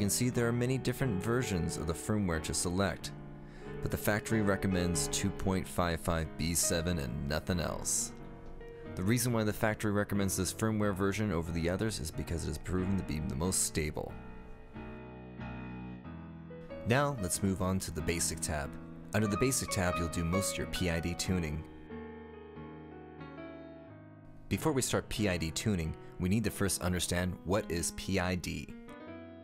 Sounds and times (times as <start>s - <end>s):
Speech: 0.0s - 3.2s, 3.8s - 8.2s, 9.0s - 14.2s, 16.8s - 21.7s, 24.5s - 28.8s
Music: 0.0s - 29.4s.